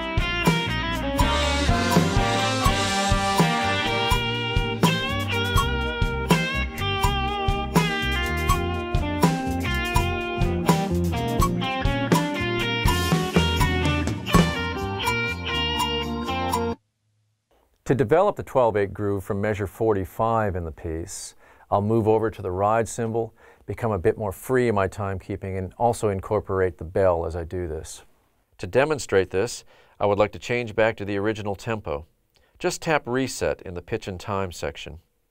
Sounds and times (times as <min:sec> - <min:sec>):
Drum kit: 0:00.0 - 0:16.8
Inside, small room: 0:00.0 - 0:35.3
Drum: 0:00.2 - 0:15.2
Speech: 0:17.8 - 0:35.1.